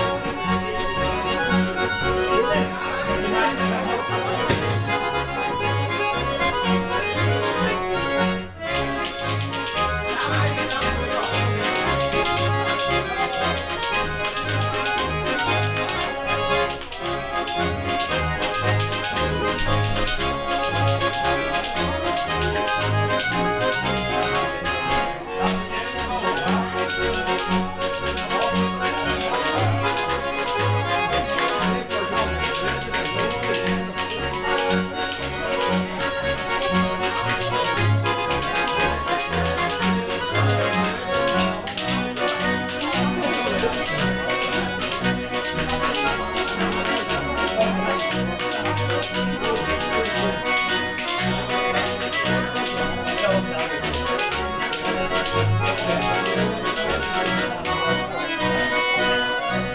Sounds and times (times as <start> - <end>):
Music: 0.0 - 59.7
Speech: 0.0 - 59.7.